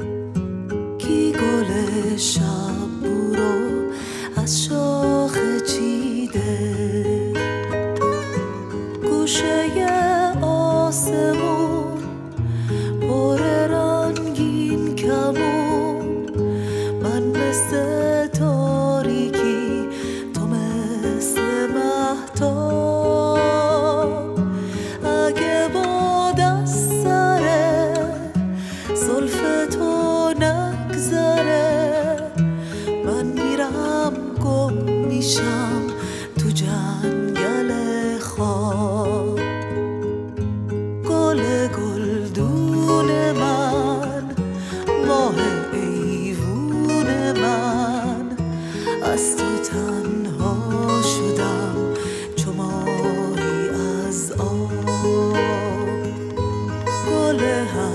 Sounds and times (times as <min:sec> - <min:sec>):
Flamenco: 0:00.0 - 0:57.9.